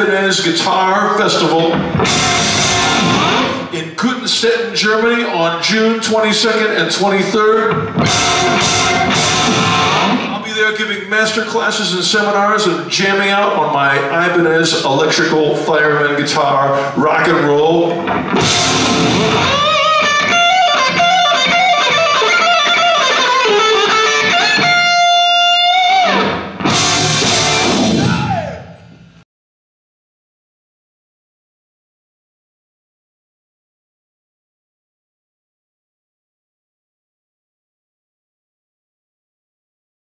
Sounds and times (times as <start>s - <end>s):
Bass guitar: 0.0s - 4.0s, 7.7s - 10.4s, 16.8s - 29.2s
Strum: 1.6s - 3.8s, 7.7s - 10.4s, 18.0s - 25.0s.